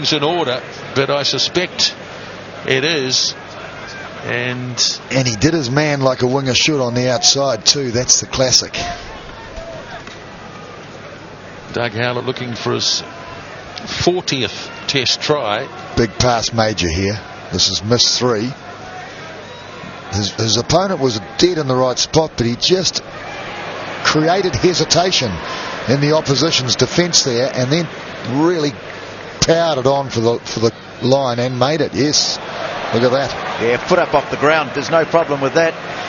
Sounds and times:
Speech: 4.3 - 9.0, 11.7 - 13.1, 13.9 - 18.6, 20.2 - 23.0, 24.1 - 28.8, 29.4 - 35.8.

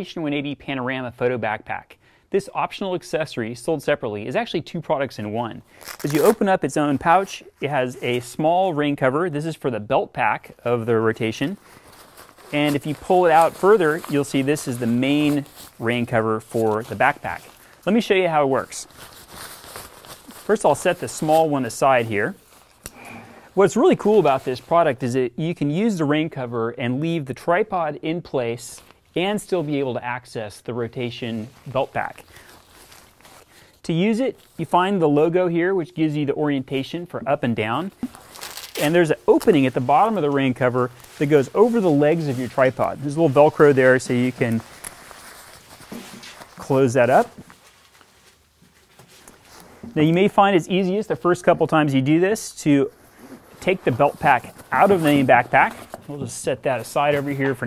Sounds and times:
Speech: 0.0 - 11.6, 12.5 - 18.9, 20.5 - 22.4, 23.6 - 32.3, 33.8 - 38.0, 38.8 - 44.7, 46.6 - 47.4, 50.0 - 53.0, 53.6 - 57.6.

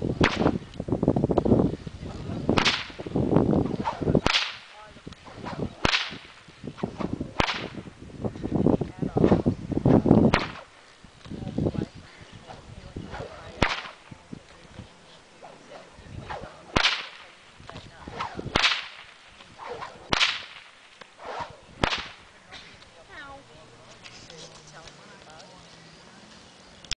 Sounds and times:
Whip: 0.2 - 0.6, 2.5 - 3.1, 3.7 - 7.9, 10.3 - 10.7, 13.1 - 14.1, 15.4 - 17.4, 18.0 - 22.2.

